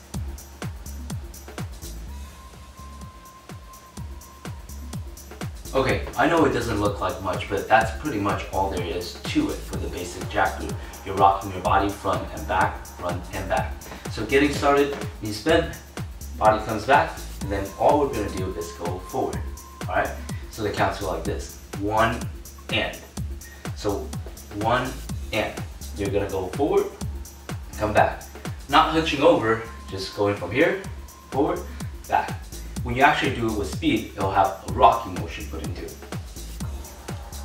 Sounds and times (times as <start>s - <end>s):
House music: 0.0s - 37.4s
Speech: 5.7s - 15.8s, 16.4s - 23.0s, 23.8s - 27.0s, 27.8s - 36.0s.